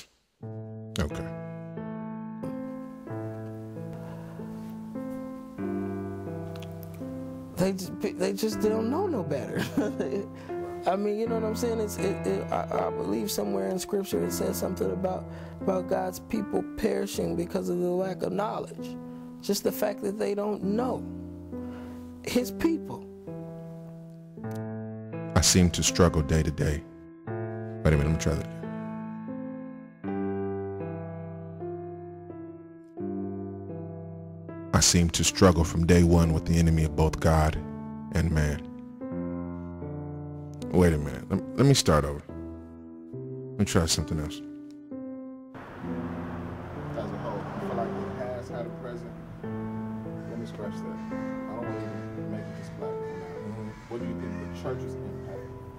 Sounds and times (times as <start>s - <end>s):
Music: 0.0s - 55.7s
Speech: 1.0s - 1.3s, 10.9s - 18.9s, 25.4s - 26.8s, 27.9s - 28.5s, 34.8s - 37.6s, 38.2s - 38.6s, 40.7s - 42.2s, 43.6s - 44.4s.